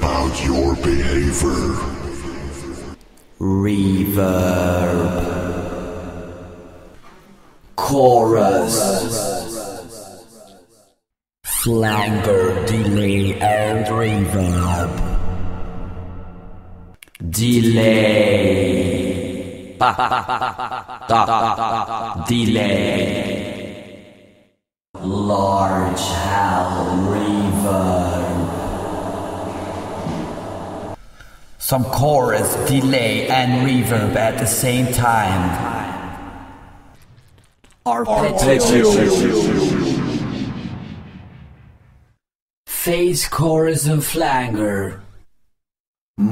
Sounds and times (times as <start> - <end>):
Speech: 0.0 - 2.8, 3.4 - 6.1, 7.8 - 9.4, 11.5 - 15.1, 17.2 - 20.2, 21.1 - 21.6, 22.2 - 23.6, 25.0 - 29.5, 31.6 - 36.3, 37.9 - 39.6, 42.7 - 45.1
Inside, large room or hall: 0.0 - 10.4, 25.0 - 39.6.